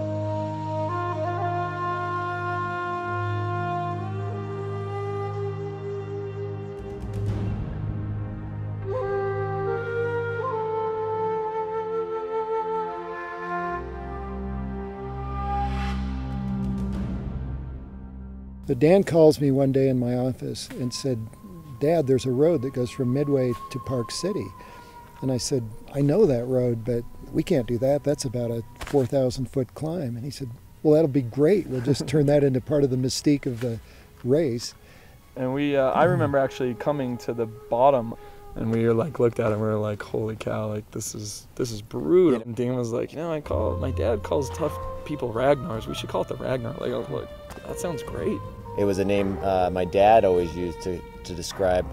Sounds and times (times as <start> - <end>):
Speech: 18.7 - 24.5, 25.2 - 34.7, 35.4 - 51.9.